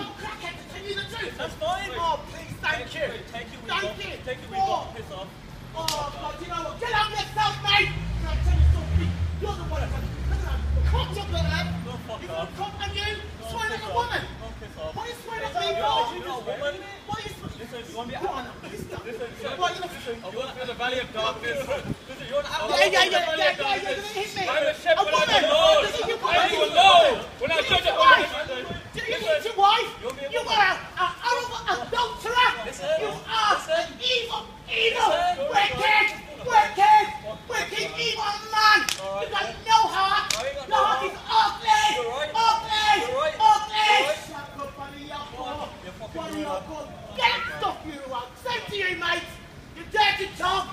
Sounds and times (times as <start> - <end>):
Speech: 0.0 - 50.7.